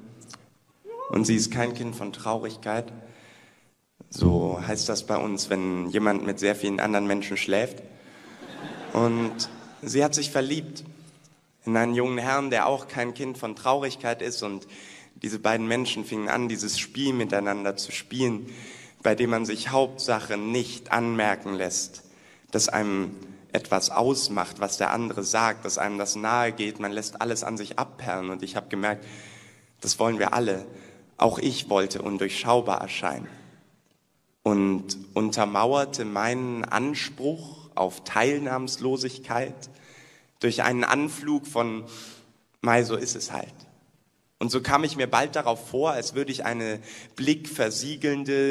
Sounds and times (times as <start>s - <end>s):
Speech: 0.9s - 3.0s, 4.1s - 7.8s, 8.9s - 10.9s, 11.6s - 29.0s, 29.8s - 33.4s, 34.4s - 39.7s, 40.4s - 41.9s, 42.6s - 43.7s, 44.4s - 48.5s.